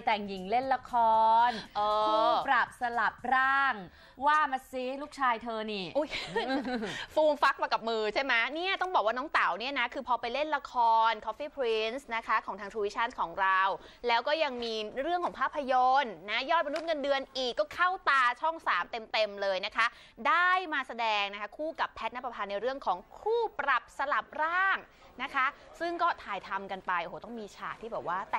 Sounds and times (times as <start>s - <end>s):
Speech: 0.0s - 6.1s, 7.2s - 28.3s.